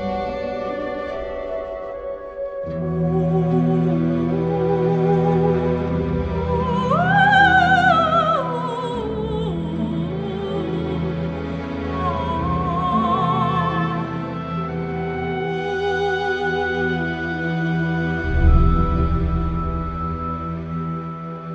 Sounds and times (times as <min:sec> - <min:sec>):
Opera: 0:00.0 - 0:21.5.